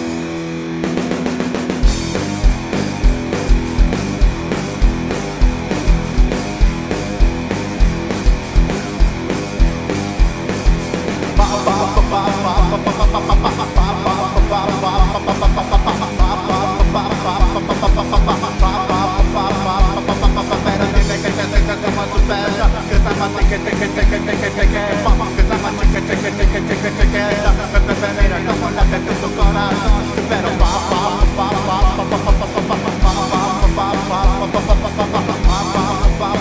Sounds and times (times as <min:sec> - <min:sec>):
Pop music: 0:11.4 - 0:36.4.